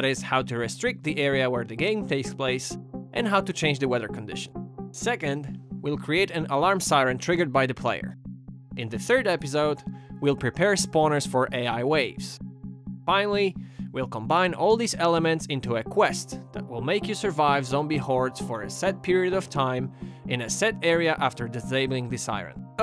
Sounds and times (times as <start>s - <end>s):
Speech: 0.0s - 8.1s, 8.8s - 12.4s, 13.1s - 22.8s
Music: 0.0s - 22.8s.